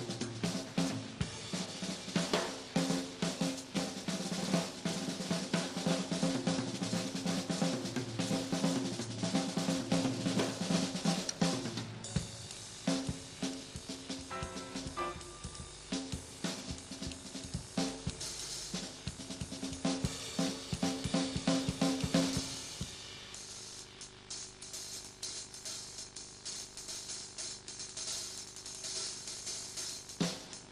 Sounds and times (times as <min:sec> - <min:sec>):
Drum: 0:00.0 - 0:30.7
Piano: 0:14.3 - 0:16.2.